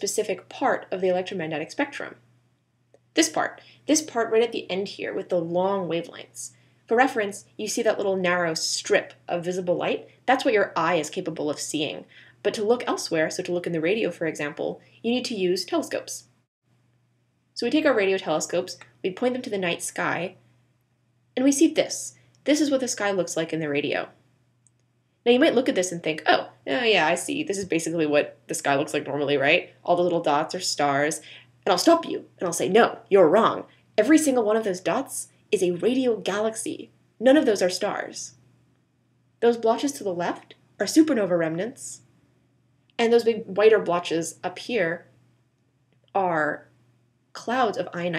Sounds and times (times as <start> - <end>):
Speech: 0.0 - 2.2, 3.2 - 16.2, 17.6 - 20.4, 21.4 - 24.1, 25.3 - 38.4, 39.4 - 42.0, 43.0 - 45.0, 46.2 - 46.7, 47.4 - 48.1.